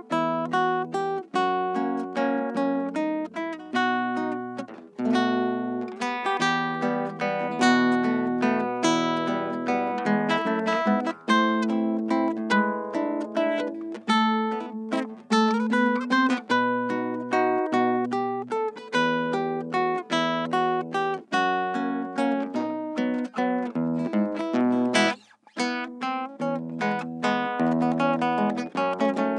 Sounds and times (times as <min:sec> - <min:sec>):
Guitar: 0:00.0 - 0:29.3.